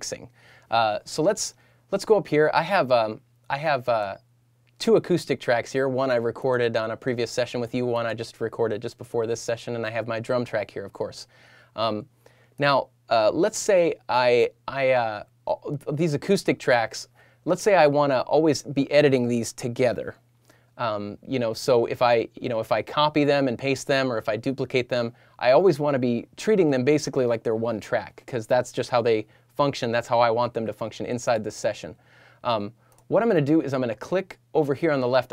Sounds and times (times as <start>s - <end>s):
Speech: 0.0s - 4.2s, 4.8s - 20.2s, 20.8s - 35.3s.